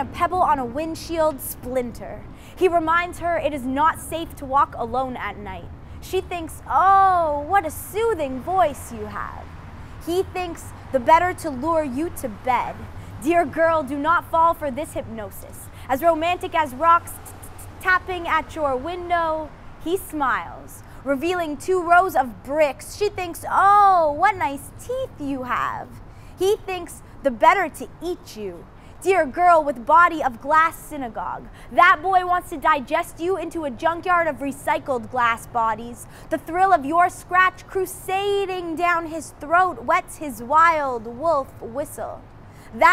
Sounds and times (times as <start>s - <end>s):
Speech: 0.0s - 42.2s.